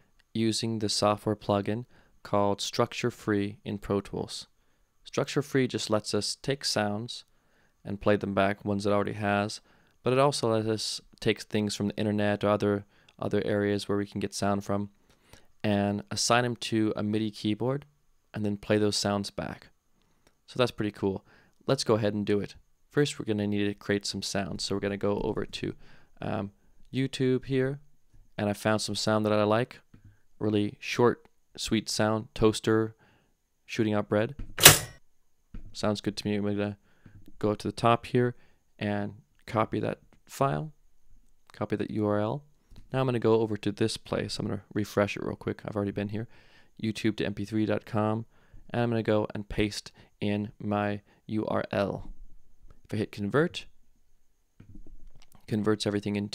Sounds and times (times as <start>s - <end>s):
Speech: 0.3s - 14.9s, 15.6s - 19.7s, 20.5s - 27.8s, 28.4s - 33.0s, 33.7s - 34.4s, 35.7s - 36.8s, 37.4s - 40.7s, 41.5s - 52.1s, 52.9s - 53.7s, 55.3s - 56.3s.